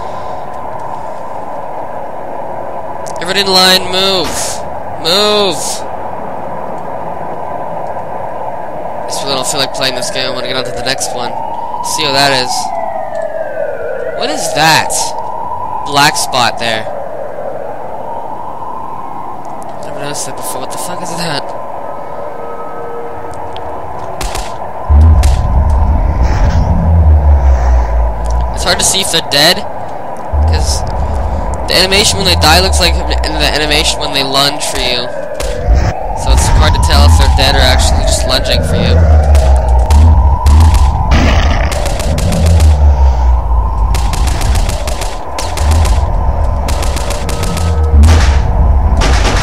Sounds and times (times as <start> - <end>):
Speech: 3.2 - 5.8, 9.1 - 12.7, 14.2 - 15.2, 15.9 - 16.9, 19.8 - 21.5, 28.5 - 29.7, 30.4 - 30.8, 31.7 - 35.2, 36.2 - 39.1.